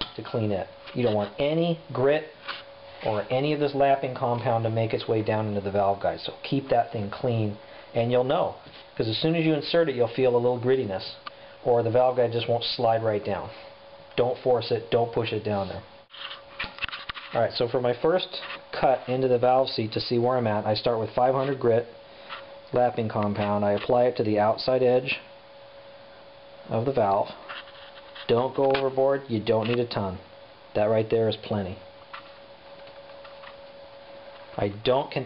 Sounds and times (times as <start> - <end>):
Speech: 0.0 - 2.4, 3.0 - 15.9, 17.3 - 22.0, 22.7 - 25.3, 26.7 - 27.4, 28.2 - 31.9, 34.6 - 35.2.